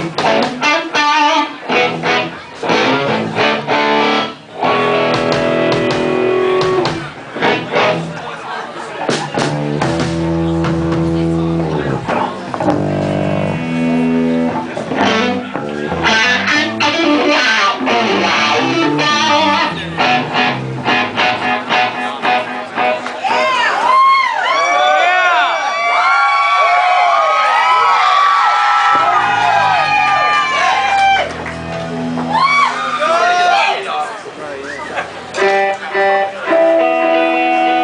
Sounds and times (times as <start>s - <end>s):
Music: 0.0s - 8.2s, 9.1s - 24.2s, 29.0s - 32.8s, 35.4s - 37.8s.